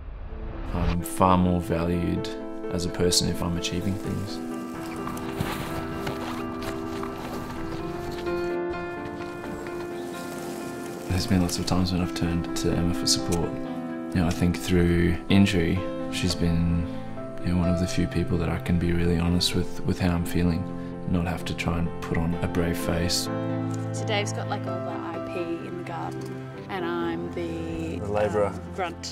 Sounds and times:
Music: 0.0 - 29.1
Speech: 0.7 - 4.4, 17.4 - 23.3.

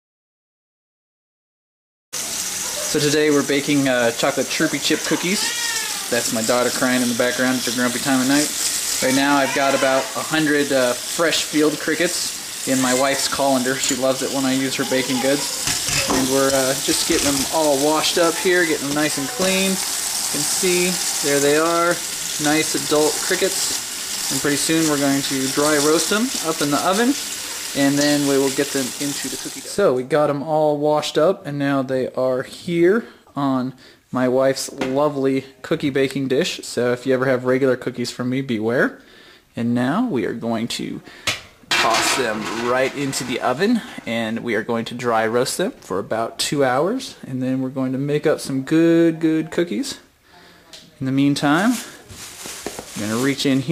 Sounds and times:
Speech: 2.8 - 27.2, 27.8 - 39.0, 39.6 - 41.1, 41.7 - 52.0, 53.0 - 53.7.

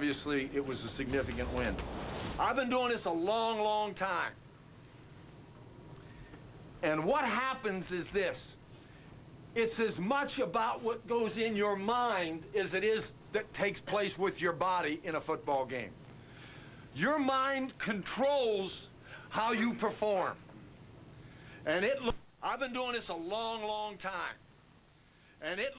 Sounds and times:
Male speech, man speaking: 0.0 - 1.8, 2.4 - 4.4, 6.8 - 8.6, 9.6 - 16.0, 17.0 - 20.4, 21.6 - 24.4, 25.4 - 25.7
Narration, monologue: 0.0 - 25.7.

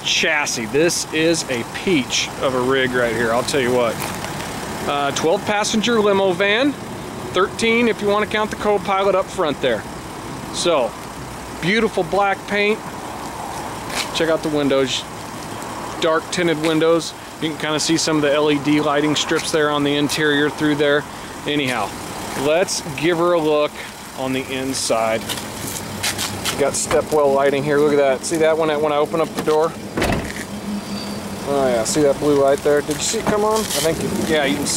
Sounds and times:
Speech: 0.0 - 4.0, 4.8 - 9.9, 10.5 - 11.0, 11.6 - 12.8, 14.1 - 15.1, 16.0 - 25.3, 26.5 - 29.8, 31.5 - 34.7.

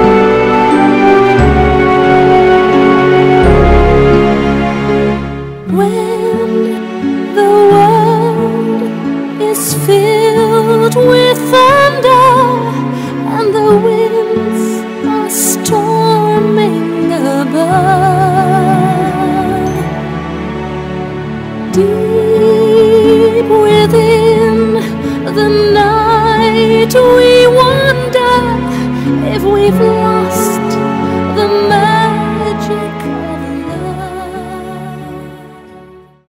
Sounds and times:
Music: 0.0 - 36.3.

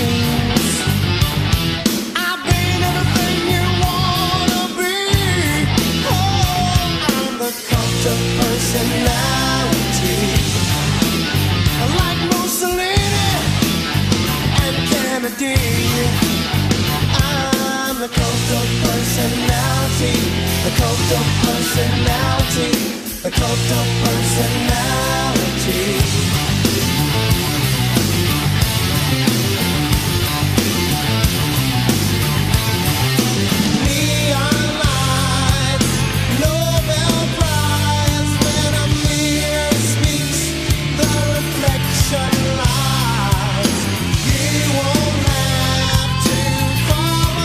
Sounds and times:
Progressive rock: 0.0 - 47.4.

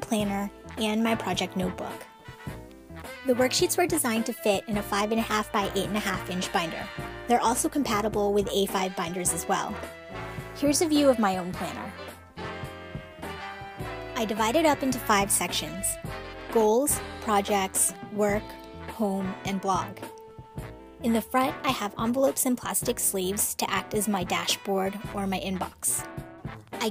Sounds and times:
Speech: 0.0 - 2.1, 3.3 - 9.8, 10.6 - 12.0, 14.2 - 16.0, 16.6 - 20.1, 21.0 - 26.1
Music: 0.0 - 26.9.

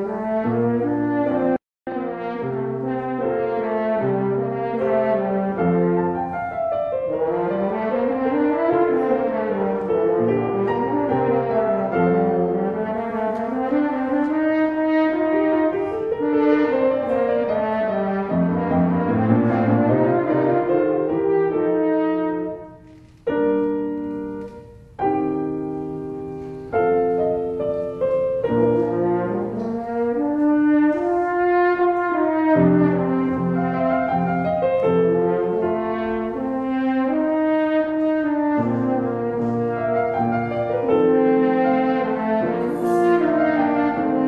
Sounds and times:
French horn: 0.0 - 44.2
Piano: 0.0 - 44.2.

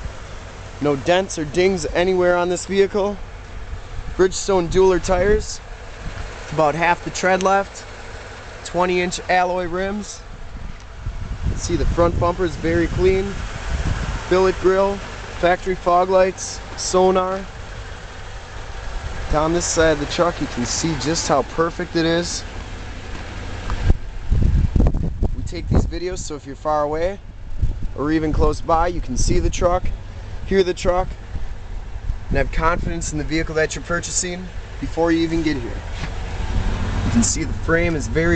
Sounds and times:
Truck: 0.0 - 38.3
Speech: 0.8 - 3.2, 4.2 - 5.6, 6.5 - 7.9, 8.6 - 10.2, 11.6 - 13.4, 14.3 - 17.5, 19.3 - 22.4, 25.4 - 27.2, 28.0 - 31.2, 32.3 - 35.9, 37.1 - 38.3.

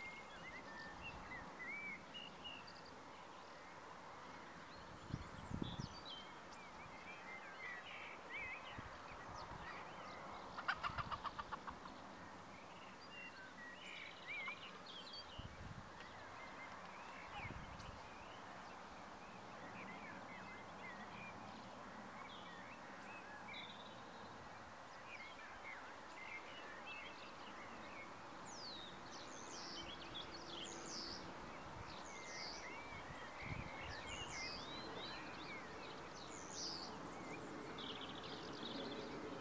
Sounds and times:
Cluck: 10.6 - 11.8.

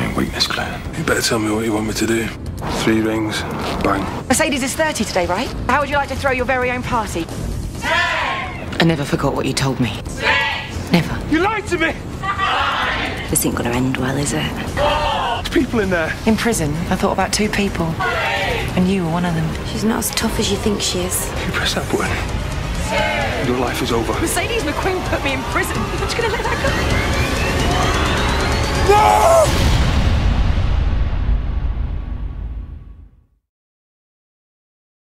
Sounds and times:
Music: 0.0 - 33.4.

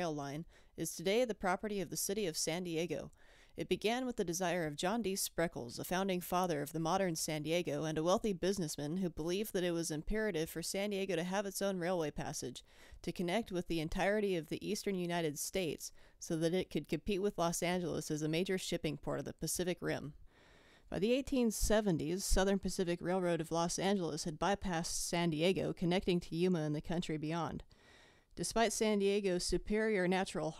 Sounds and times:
Speech: 0.0 - 20.2, 20.9 - 27.6, 28.4 - 30.5.

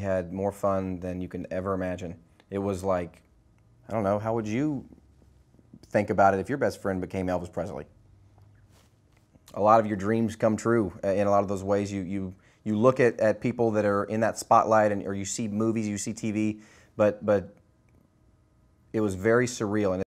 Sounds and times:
Speech: 0.0 - 3.3, 3.9 - 5.0, 5.8 - 8.0, 9.5 - 17.6, 18.9 - 20.0.

